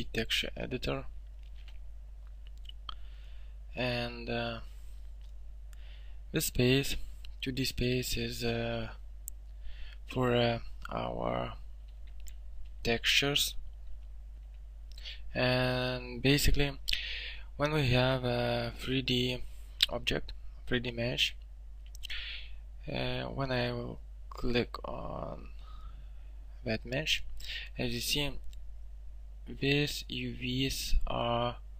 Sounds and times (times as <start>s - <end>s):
Speech: 0.0s - 1.1s, 3.8s - 4.7s, 6.3s - 9.0s, 10.1s - 11.6s, 12.8s - 13.6s, 15.2s - 21.4s, 22.8s - 25.6s, 26.6s - 28.4s, 29.5s - 31.6s.